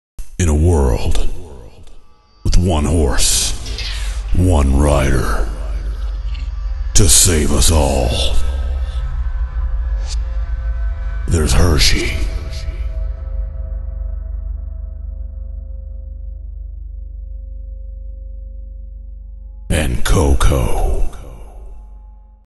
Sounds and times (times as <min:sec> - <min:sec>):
Speech: 0:00.2 - 0:06.1, 0:07.0 - 0:09.0, 0:11.3 - 0:13.0, 0:19.7 - 0:21.8
Music: 0:00.2 - 0:22.4.